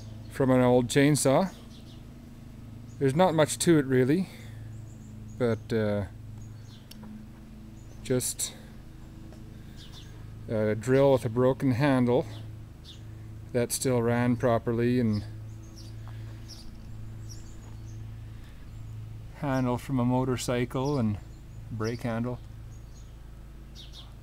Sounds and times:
Speech: 0.3 - 1.6, 3.0 - 4.5, 5.4 - 6.2, 8.0 - 8.7, 10.5 - 12.4, 13.5 - 15.4, 19.4 - 22.4.

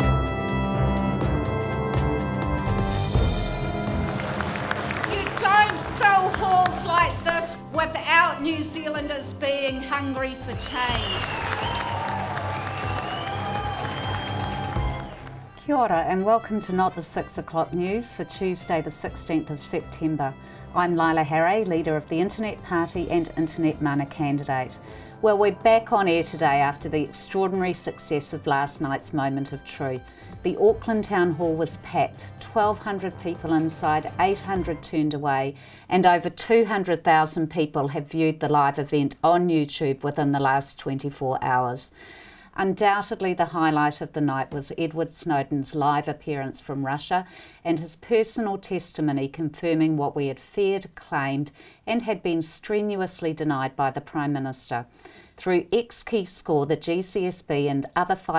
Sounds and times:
Music: 0.0 - 40.0
Speech: 5.1 - 11.0, 15.6 - 41.9, 42.6 - 58.3.

